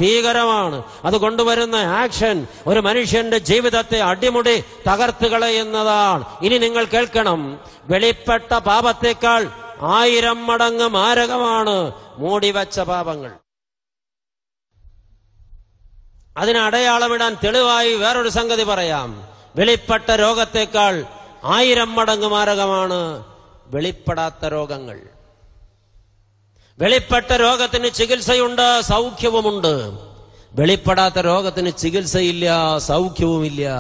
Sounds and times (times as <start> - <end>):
Male speech, man speaking: 0.0 - 13.4, 16.4 - 25.1, 26.8 - 30.0, 30.6 - 33.8
Narration, monologue: 0.0 - 13.6, 14.8 - 33.8.